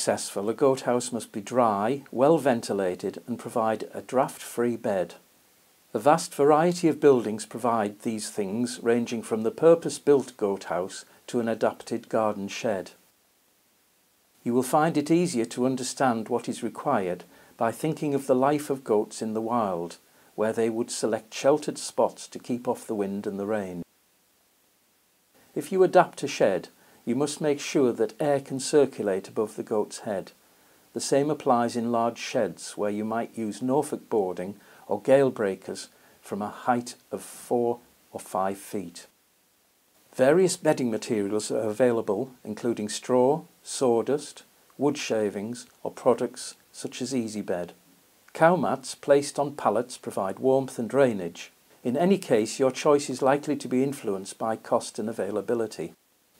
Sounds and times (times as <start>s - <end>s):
Speech: 0.0s - 5.3s, 5.9s - 13.1s, 14.4s - 23.9s, 25.5s - 39.2s, 40.1s - 56.0s.